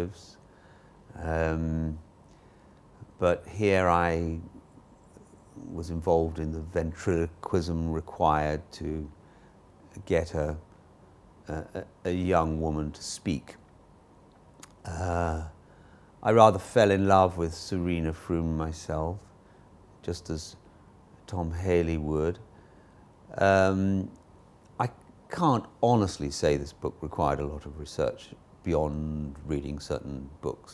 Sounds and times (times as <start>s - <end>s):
Speech: 0.0s - 0.4s, 1.1s - 2.0s, 3.0s - 4.6s, 5.6s - 9.2s, 9.9s - 10.7s, 11.5s - 13.6s, 14.6s - 15.6s, 16.2s - 19.3s, 20.0s - 20.6s, 21.2s - 22.4s, 23.3s - 24.2s, 24.8s - 30.7s.